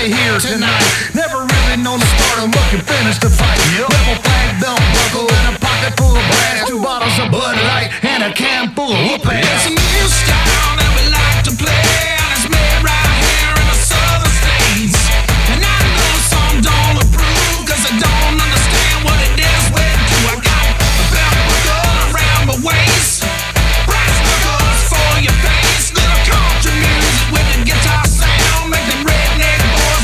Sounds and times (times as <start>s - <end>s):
Music: 0.0s - 30.0s.